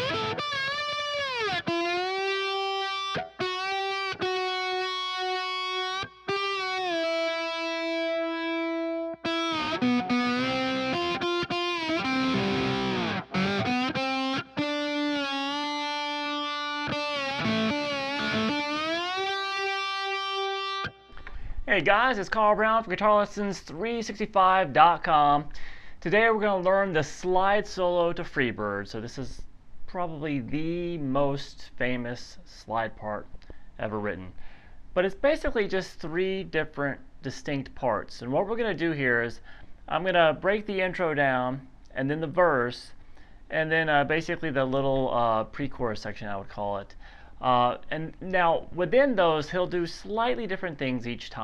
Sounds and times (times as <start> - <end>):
Music: 0.0 - 21.3
Distortion: 0.0 - 51.4.